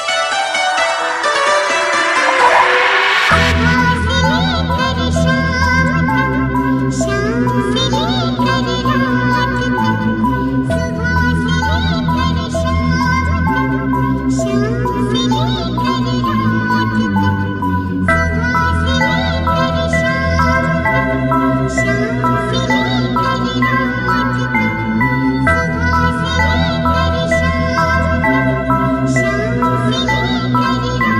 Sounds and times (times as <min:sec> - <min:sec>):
Music: 0:00.0 - 0:31.1.